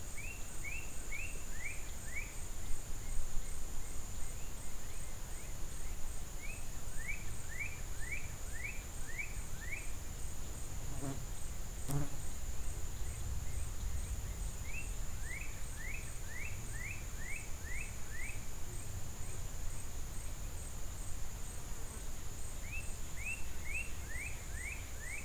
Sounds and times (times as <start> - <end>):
Insect: 0.0 - 25.2.